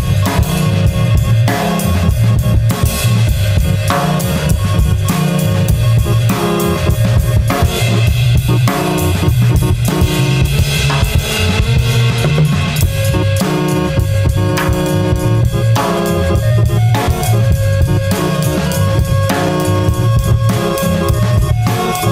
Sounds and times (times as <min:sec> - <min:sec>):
Music: 0:00.0 - 0:22.1.